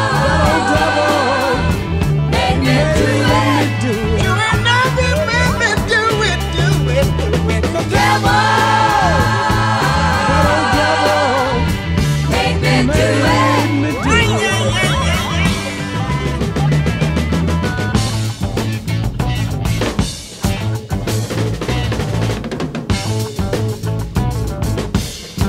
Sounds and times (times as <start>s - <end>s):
Hip hop music: 0.0s - 9.2s, 11.3s - 21.1s.